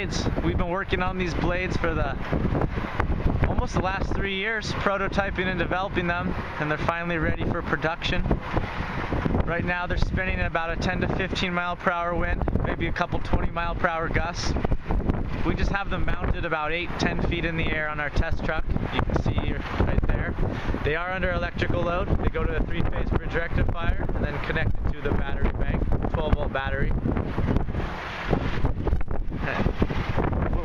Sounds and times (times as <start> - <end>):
Wind noise (microphone): 0.0 - 30.6.